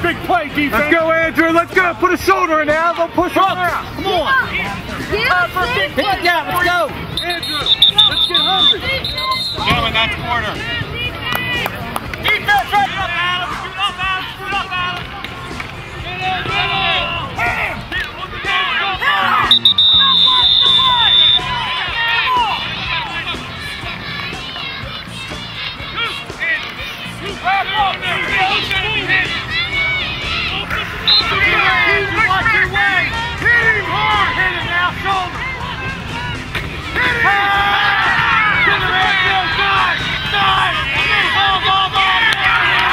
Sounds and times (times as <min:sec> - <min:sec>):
Music: 0:00.0 - 0:42.9.